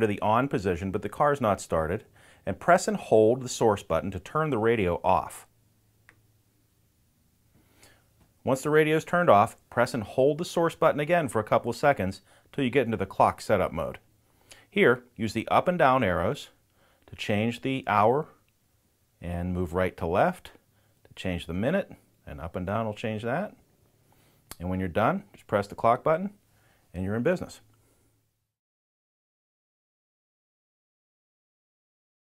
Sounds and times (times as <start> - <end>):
Speech: 0.0 - 5.5, 8.4 - 14.0, 14.7 - 18.4, 19.2 - 23.6, 24.5 - 27.7.